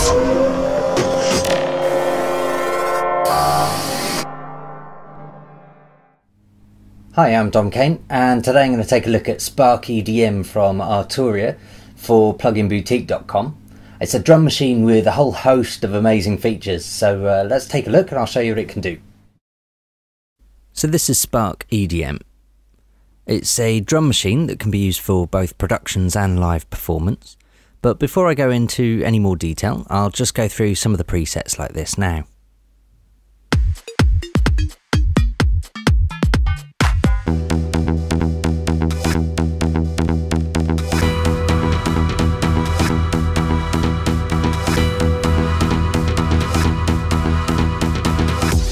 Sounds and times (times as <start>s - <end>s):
Music: 0.0s - 6.2s, 33.5s - 48.7s
Speech: 7.1s - 19.0s, 20.8s - 22.3s, 23.3s - 32.4s.